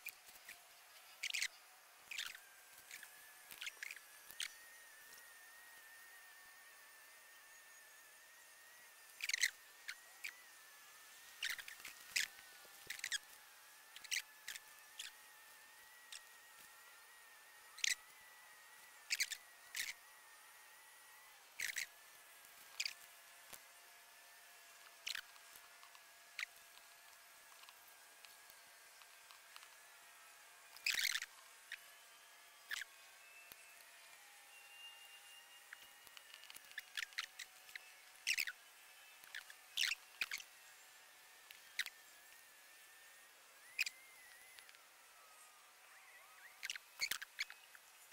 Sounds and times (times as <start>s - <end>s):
Patter: 0.0s - 48.1s
Insect: 1.2s - 4.6s, 9.2s - 10.4s, 11.4s - 12.3s, 17.8s - 18.0s, 19.1s - 20.0s, 21.6s - 21.9s, 25.0s - 25.3s, 30.8s - 31.3s, 32.7s - 32.9s, 39.3s - 40.5s.